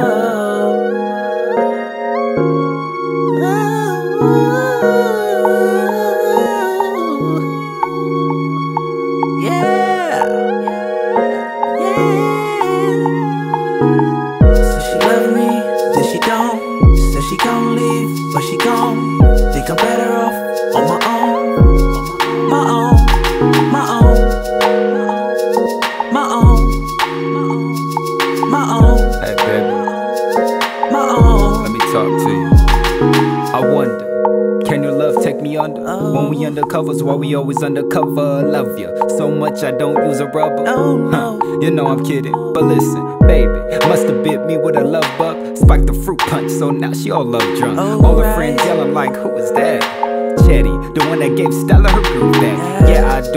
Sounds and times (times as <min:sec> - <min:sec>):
Music: 0:00.0 - 0:53.3.